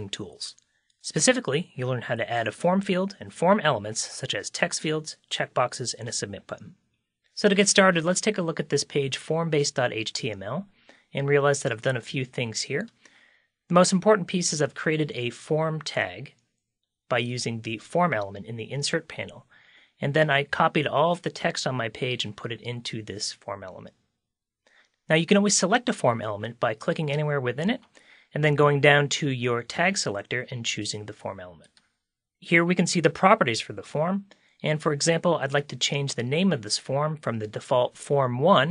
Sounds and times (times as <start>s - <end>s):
Speech: 0.0s - 6.8s, 7.4s - 13.0s, 13.7s - 16.4s, 17.1s - 24.0s, 25.1s - 31.8s, 32.4s - 38.7s.